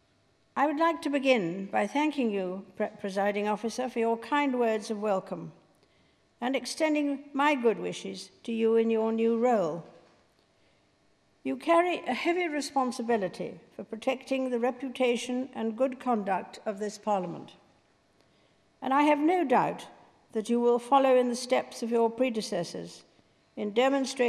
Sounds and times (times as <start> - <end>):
Female speech, woman speaking: 0.6 - 5.5, 6.4 - 9.8, 11.5 - 17.6, 18.8 - 23.0, 23.6 - 24.2.